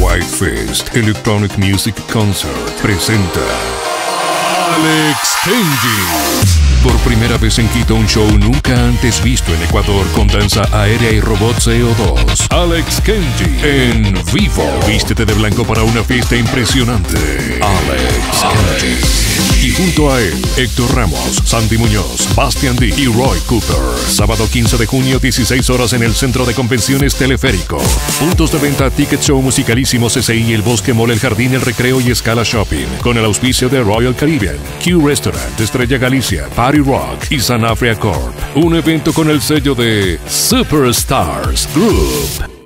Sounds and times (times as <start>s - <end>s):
Speech: 0.0s - 3.7s, 4.6s - 42.6s
Dubstep: 1.6s - 30.0s, 41.4s - 42.6s.